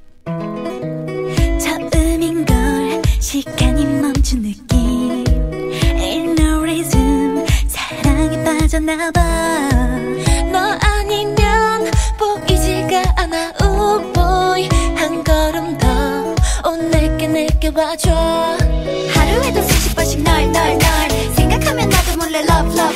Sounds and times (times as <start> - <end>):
Music: 0.0 - 22.9.